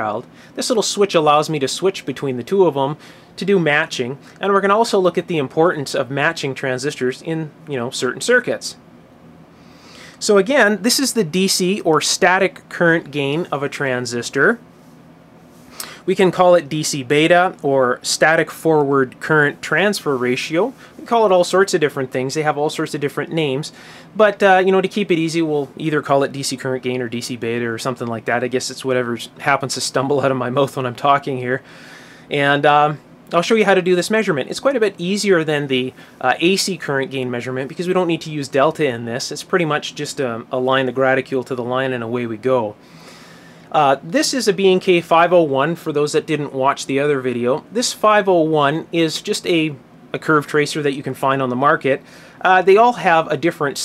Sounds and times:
Speech: 0:00.0 - 0:08.8, 0:10.2 - 0:14.6, 0:16.0 - 0:31.6, 0:32.3 - 0:42.8, 0:43.7 - 0:53.8.

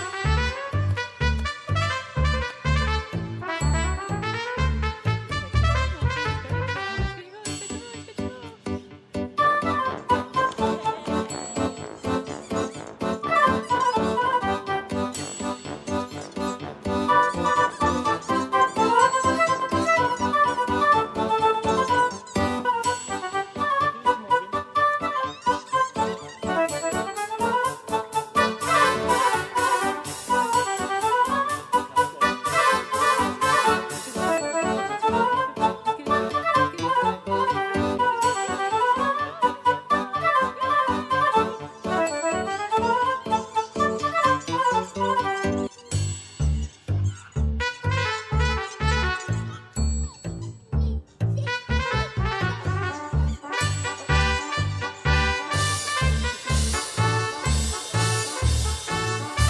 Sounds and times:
Music: 0:00.0 - 0:59.4.

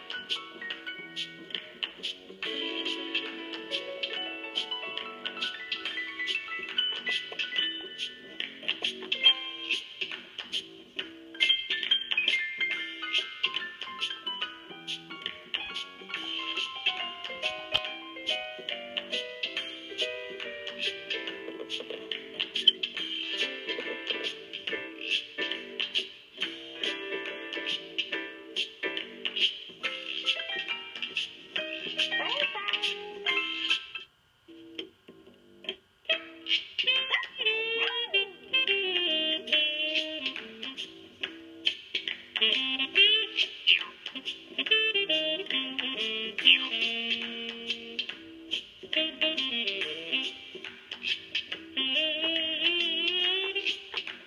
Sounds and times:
Inside, small room: 0:00.0 - 0:54.2
Music: 0:00.0 - 0:54.2.

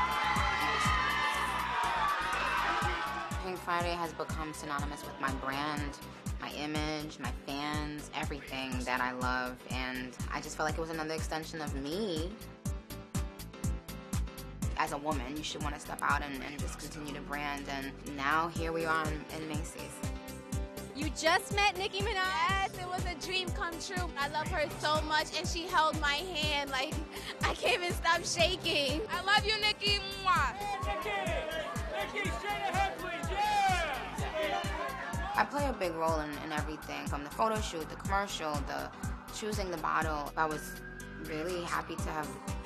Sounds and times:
Music: 0:00.0 - 0:42.6
Speech: 0:03.4 - 0:12.4, 0:14.8 - 0:19.9, 0:21.0 - 0:30.5, 0:35.4 - 0:42.4.

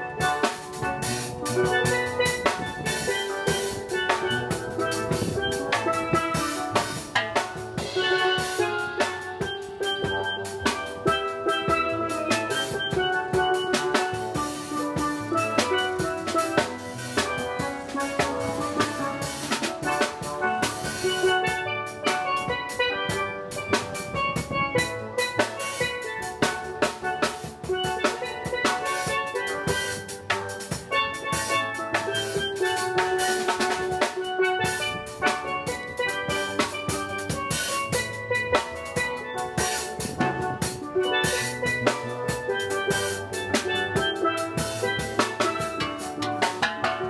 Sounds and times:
Drum kit: 0:00.0 - 0:47.0
Steelpan: 0:00.0 - 0:47.0.

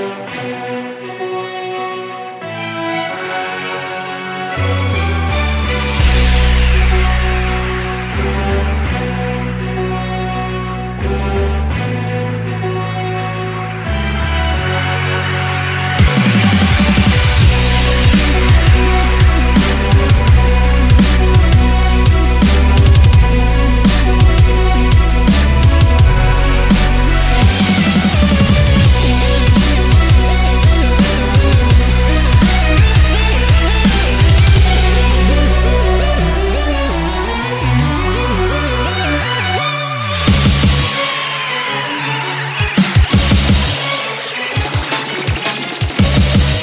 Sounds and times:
Music: 0:00.0 - 0:46.6.

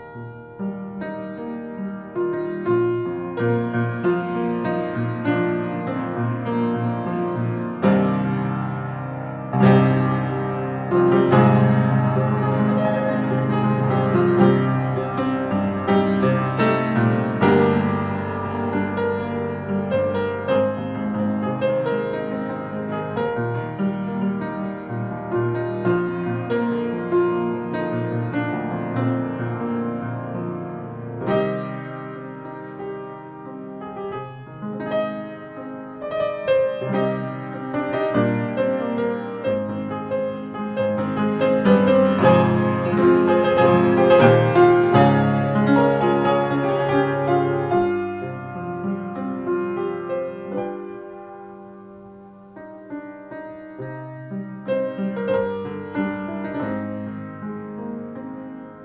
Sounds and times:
Music: 0:00.0 - 0:58.8.

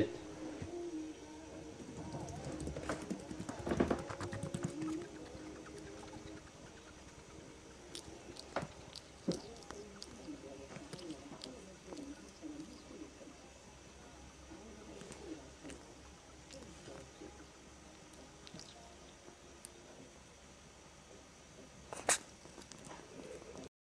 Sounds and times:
Sneeze: 0:22.0 - 0:22.3.

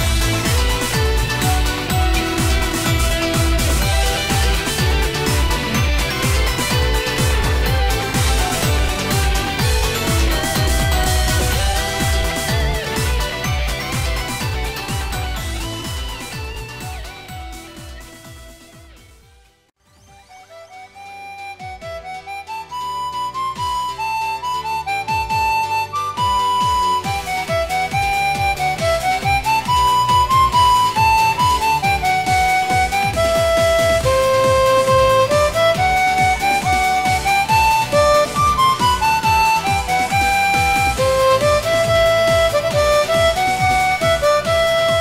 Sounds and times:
Harmonica: 0:00.0 - 0:18.6, 0:19.9 - 0:45.0.

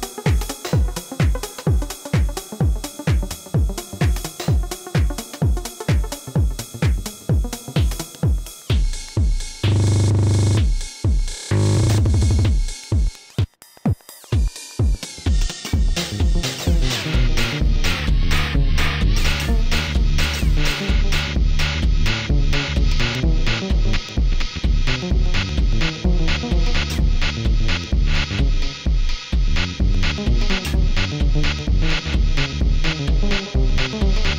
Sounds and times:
House music: 0:00.0 - 0:34.3
Synthesizer: 0:00.0 - 0:34.3.

